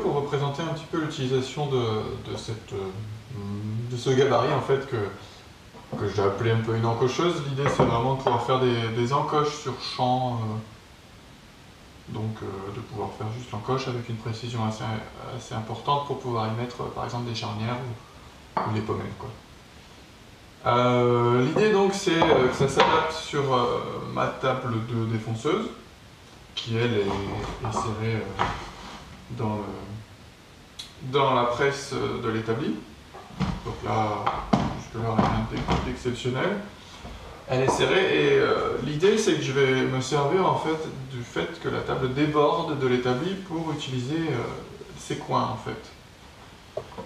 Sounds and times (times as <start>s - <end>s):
Speech: 0.0s - 10.7s, 12.0s - 18.0s, 18.6s - 19.4s, 20.6s - 25.9s, 26.6s - 28.7s, 29.3s - 30.1s, 30.8s - 36.8s, 37.4s - 46.0s.